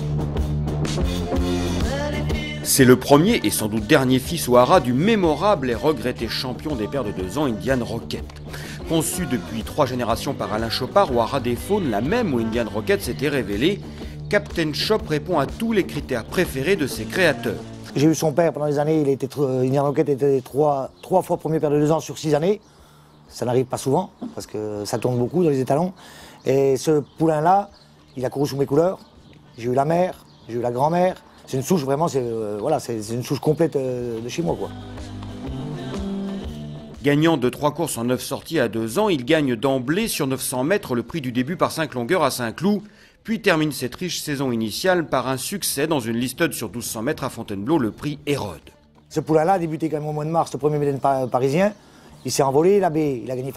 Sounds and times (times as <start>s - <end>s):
Music: 0.0s - 53.5s
Speech: 2.6s - 22.6s, 23.3s - 34.8s, 37.0s - 53.5s.